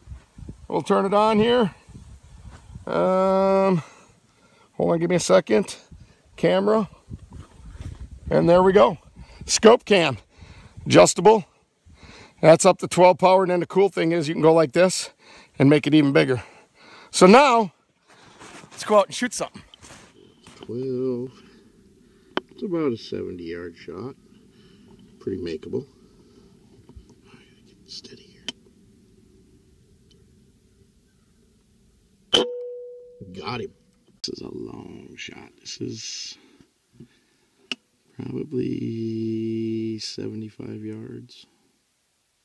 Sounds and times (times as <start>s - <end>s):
Speech: 0.7s - 1.8s, 2.9s - 3.9s, 4.8s - 7.0s, 8.3s - 10.2s, 10.9s - 11.5s, 12.4s - 16.5s, 17.2s - 17.8s, 18.8s - 19.6s, 20.6s - 21.4s, 22.6s - 24.2s, 25.2s - 25.9s, 27.8s - 28.5s, 33.3s - 36.4s, 38.2s - 41.5s.